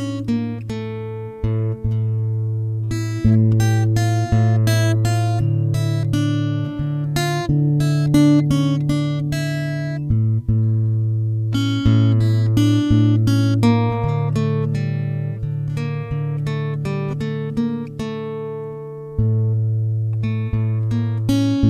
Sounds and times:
Strum: 0.0 - 21.7.

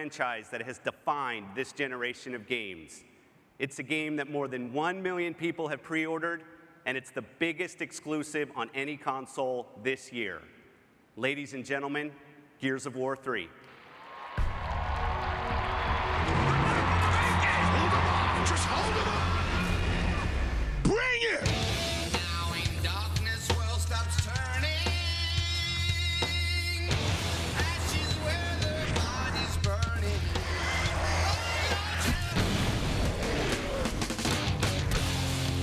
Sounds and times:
Speech: 0.0 - 3.0, 3.6 - 10.5, 11.2 - 13.6, 17.0 - 19.5
Music: 14.4 - 35.6.

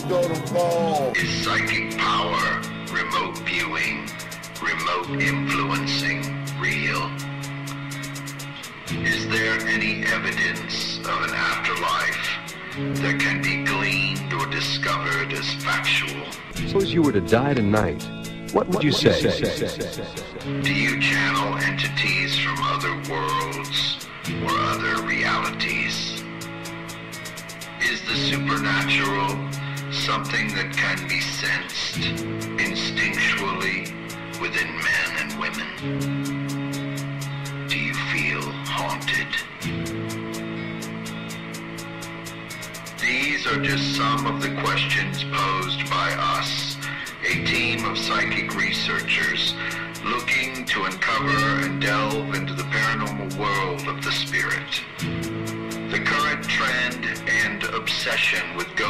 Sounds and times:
Speech: 0.0 - 7.2, 9.0 - 12.4, 13.0 - 26.2, 27.8 - 35.8, 37.7 - 39.5, 43.0 - 54.8, 55.9 - 58.9
Music: 0.0 - 58.9.

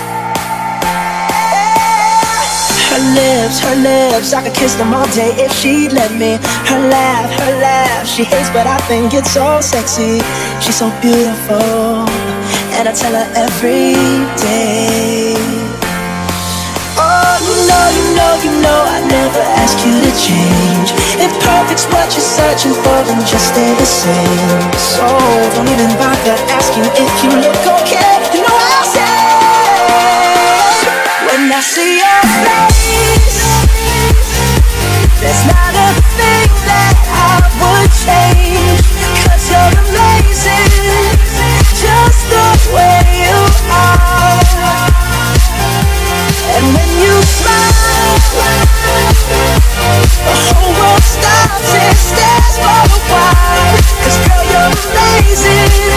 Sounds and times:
House music: 0.0 - 55.9.

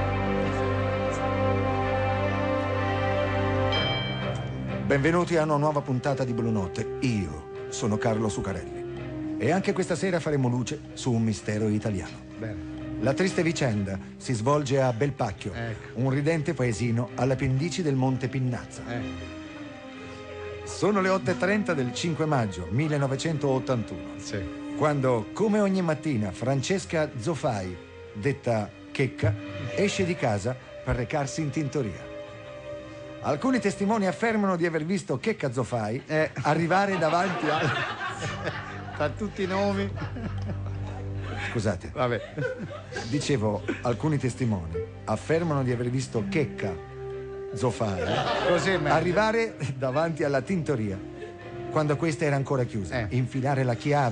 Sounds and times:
Music: 0.0 - 54.1.

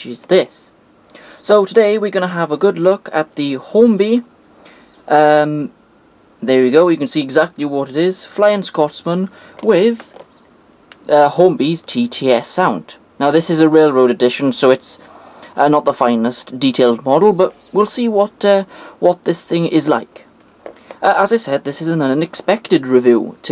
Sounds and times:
Speech: 0.0 - 0.8, 1.4 - 4.3, 5.1 - 5.8, 6.4 - 10.2, 11.0 - 20.3, 21.0 - 23.5.

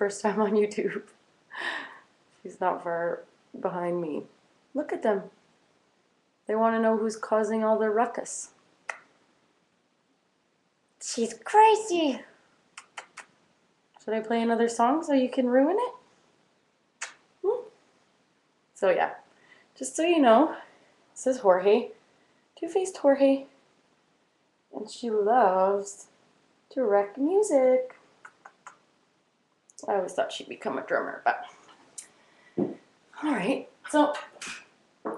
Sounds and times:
Speech: 0.0 - 1.1, 2.4 - 5.4, 6.5 - 8.6, 11.0 - 13.2, 14.0 - 16.1, 17.4 - 17.8, 18.8 - 22.0, 22.6 - 23.6, 24.8 - 26.1, 26.7 - 28.0, 29.8 - 31.6, 33.2 - 35.1.

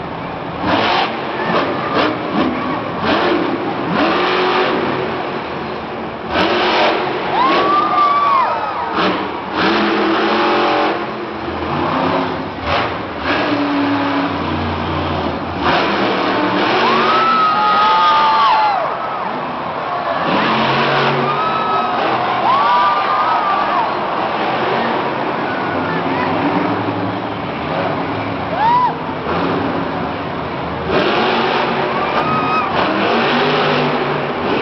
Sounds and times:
Truck: 0.0 - 34.6.

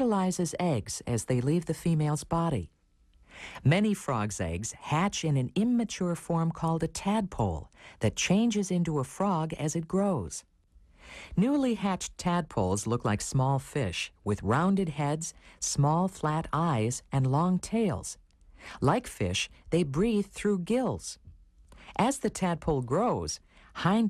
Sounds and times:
Speech: 0.0 - 2.8, 3.6 - 10.5, 11.3 - 21.2, 21.8 - 24.1.

